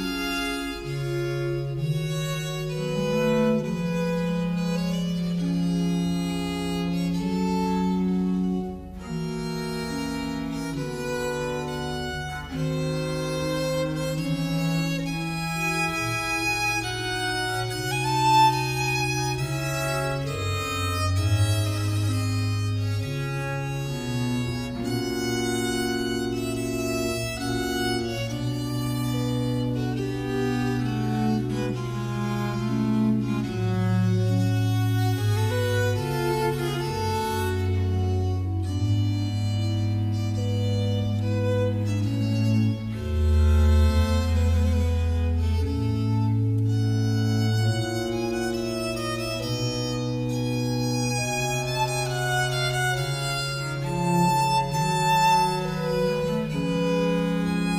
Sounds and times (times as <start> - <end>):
Violin, fiddle: 0.0 - 57.7.